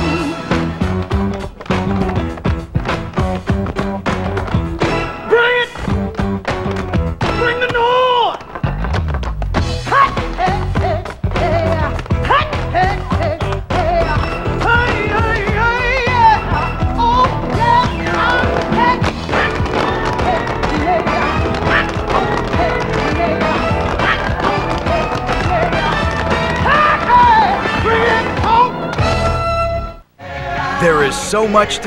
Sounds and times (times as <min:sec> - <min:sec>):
Music: 0:00.0 - 0:31.8.